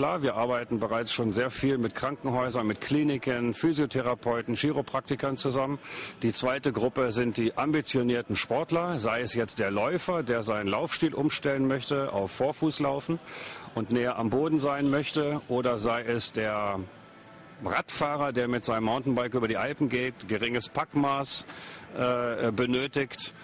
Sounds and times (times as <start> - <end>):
Speech: 0.0 - 13.2, 13.8 - 16.9, 17.6 - 23.4
Music: 0.0 - 23.4.